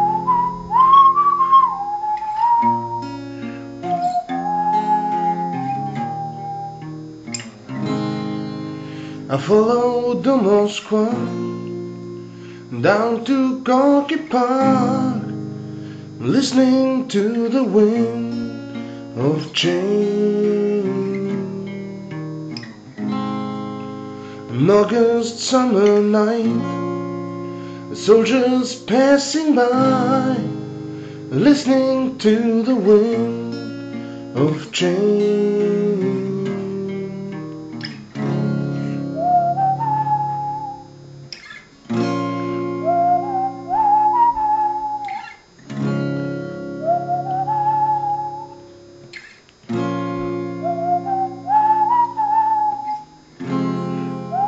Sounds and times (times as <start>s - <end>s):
Music: 0.0s - 54.4s.